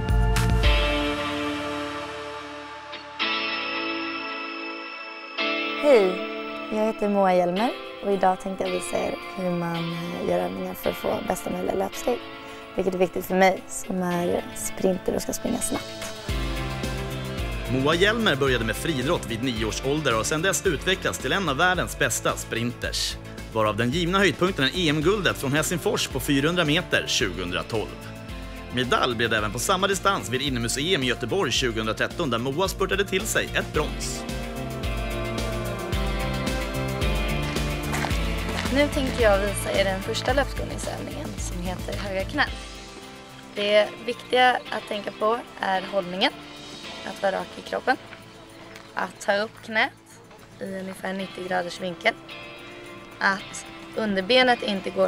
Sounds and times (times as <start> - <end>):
Music: 0.0 - 55.0
Speech: 17.7 - 27.9, 28.8 - 34.2, 38.7 - 42.5, 43.6 - 46.3, 53.2 - 55.0.